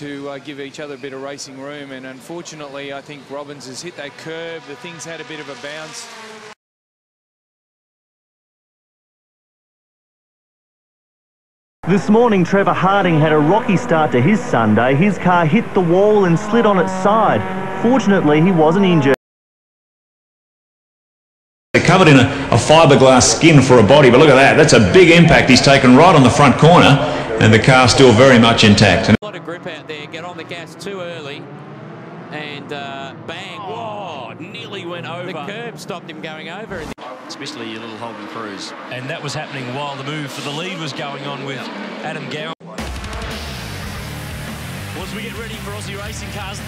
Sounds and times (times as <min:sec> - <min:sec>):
Speech: 0:00.0 - 0:06.1, 0:11.9 - 0:19.2, 0:21.8 - 0:31.4, 0:32.3 - 0:42.8, 0:45.0 - 0:46.6.